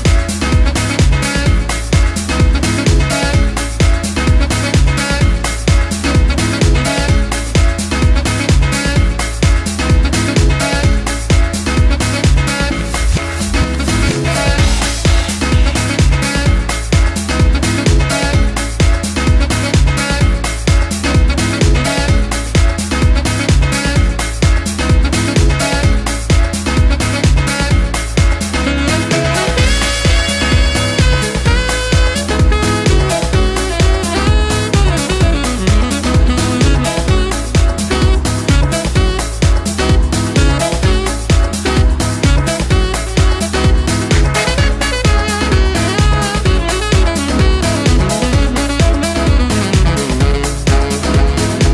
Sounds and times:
Disco: 0:00.0 - 0:51.7.

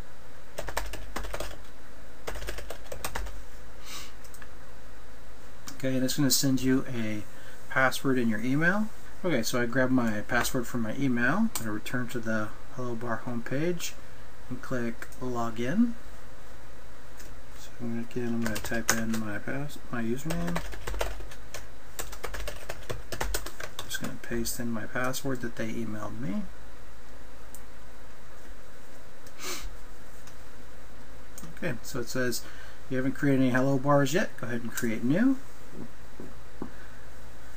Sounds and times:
Typing: 0:00.6 - 0:01.6, 0:02.2 - 0:03.4, 0:18.4 - 0:19.2, 0:20.3 - 0:24.0
Speech: 0:05.7 - 0:16.0, 0:17.6 - 0:20.7, 0:23.8 - 0:26.6, 0:31.5 - 0:35.4.

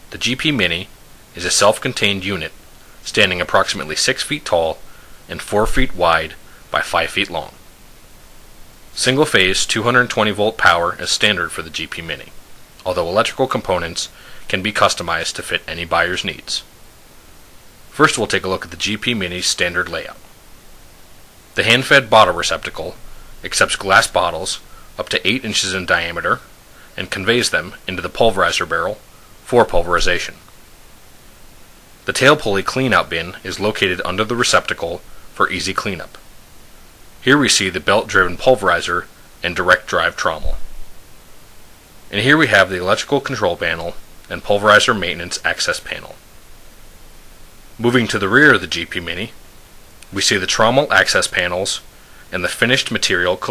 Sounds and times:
Speech: 0:00.1 - 0:07.6, 0:09.0 - 0:16.7, 0:17.9 - 0:20.2, 0:21.6 - 0:30.5, 0:32.0 - 0:36.2, 0:37.2 - 0:40.7, 0:42.1 - 0:46.2, 0:47.8 - 0:49.4, 0:50.1 - 0:53.5.

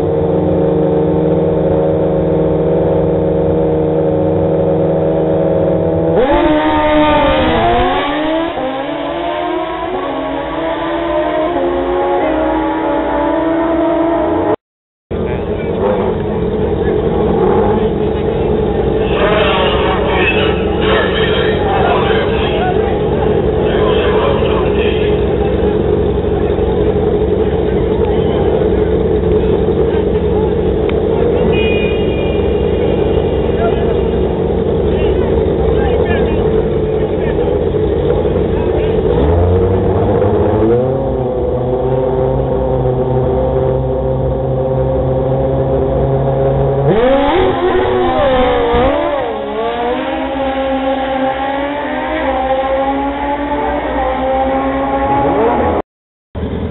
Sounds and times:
Motorcycle: 0:00.0 - 0:55.8, 0:56.4 - 0:56.7
Outside, urban or manmade: 0:00.0 - 0:56.7
Speech: 0:17.7 - 0:25.8, 0:33.5 - 0:34.0, 0:35.0 - 0:37.6.

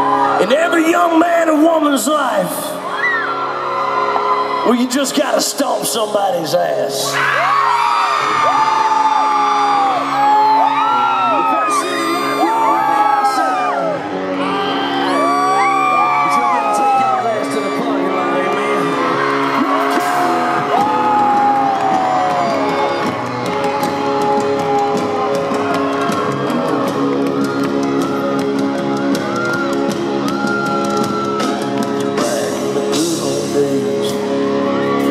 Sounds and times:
Music: 0:00.0 - 0:35.1.

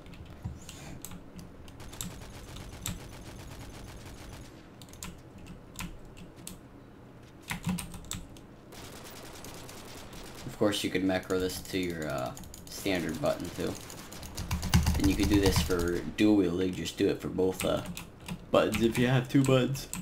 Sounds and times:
Typing: 0:13.6 - 0:16.0.

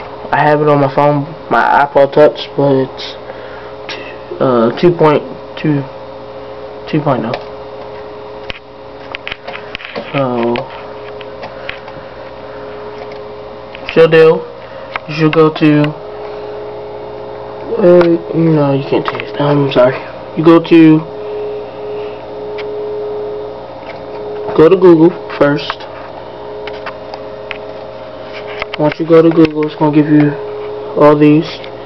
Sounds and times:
Speech: 0:00.3 - 0:03.2, 0:04.3 - 0:06.0, 0:06.9 - 0:07.4, 0:10.1 - 0:10.7, 0:13.8 - 0:14.5, 0:15.1 - 0:16.0, 0:17.7 - 0:21.1, 0:24.5 - 0:25.9, 0:28.8 - 0:30.4, 0:31.0 - 0:31.7.

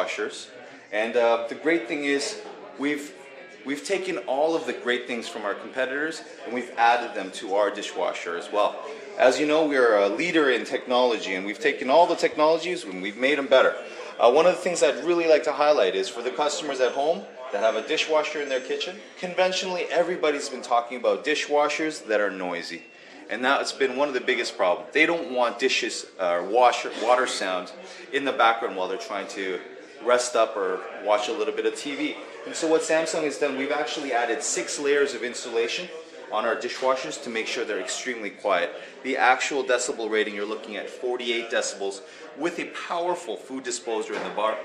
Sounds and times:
Speech: 0:00.0 - 0:44.6.

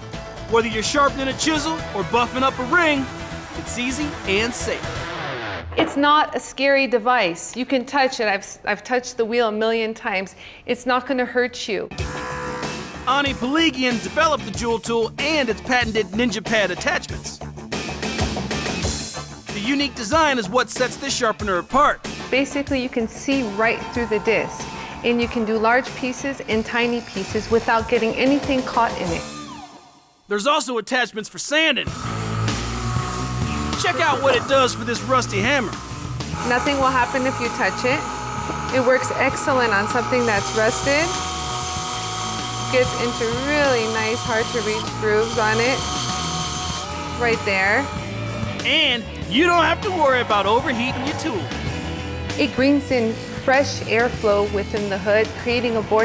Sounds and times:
Music: 0:00.0 - 0:08.0, 0:11.2 - 0:56.0.

